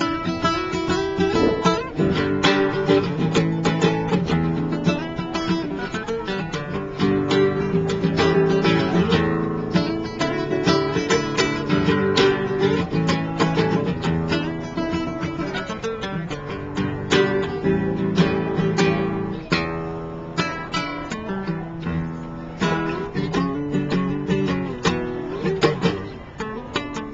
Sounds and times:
Guitar: 0:00.0 - 0:27.1.

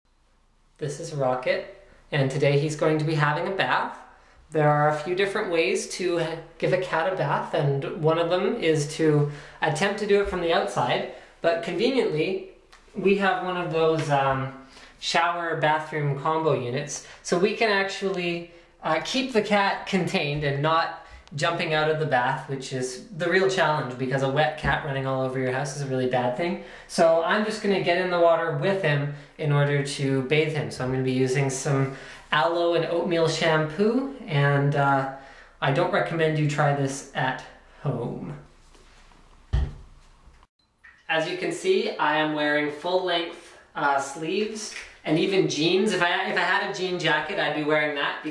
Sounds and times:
Speech: 0:00.8 - 0:38.5, 0:41.1 - 0:48.3.

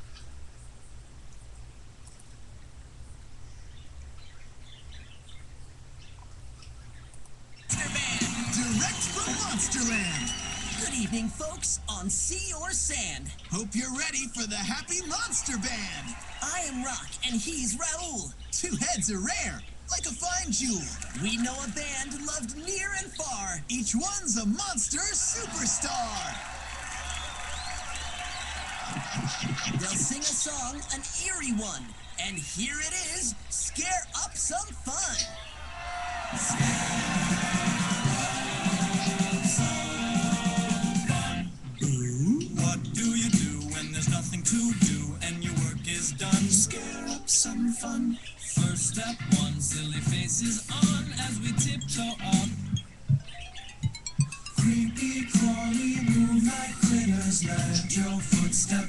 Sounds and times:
Speech: 0:07.7 - 0:26.4, 0:29.0 - 0:35.4, 0:41.8 - 0:48.6.

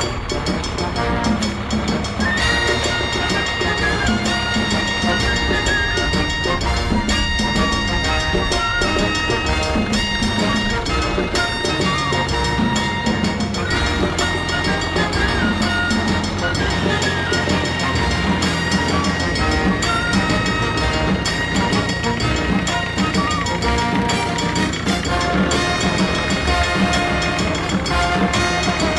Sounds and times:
Music: 0:00.0 - 0:28.9
Vehicle: 0:00.0 - 0:28.9.

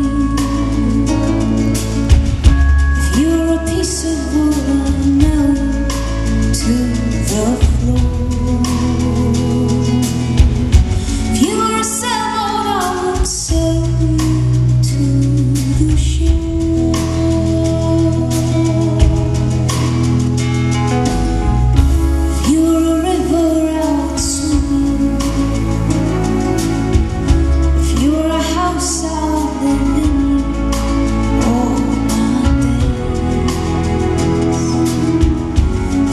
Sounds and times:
Music: 0:00.0 - 0:36.1.

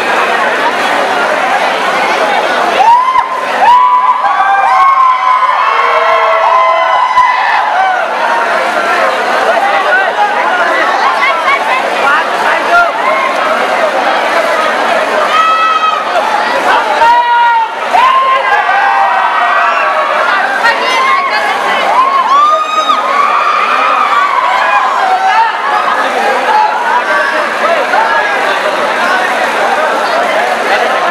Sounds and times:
Cheering: 0:00.0 - 0:31.1
Crowd: 0:00.0 - 0:31.1
Speech: 0:00.0 - 0:31.1.

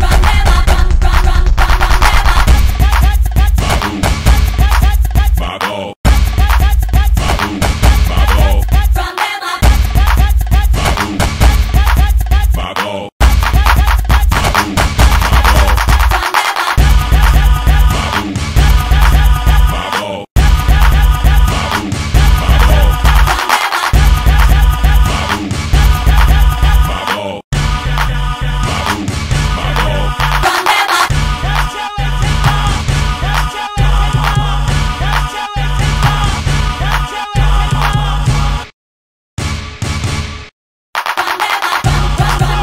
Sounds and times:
Independent music: 0:00.0 - 0:38.6, 0:41.1 - 0:42.6.

